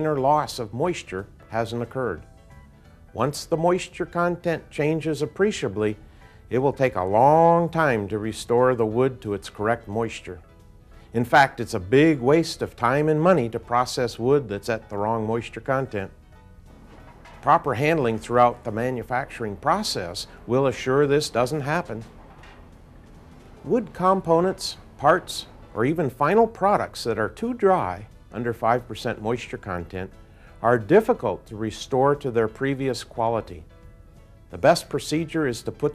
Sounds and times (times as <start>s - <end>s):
Speech: 0.0s - 2.2s, 3.2s - 10.4s, 11.2s - 16.1s, 17.4s - 22.0s, 23.7s - 33.6s, 34.6s - 35.9s.